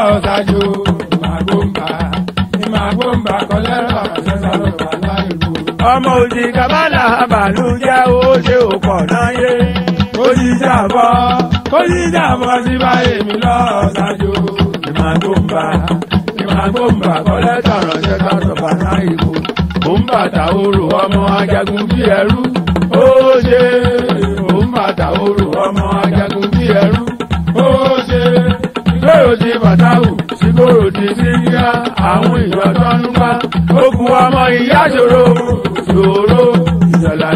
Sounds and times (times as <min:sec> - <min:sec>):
Music: 0:00.0 - 0:37.3.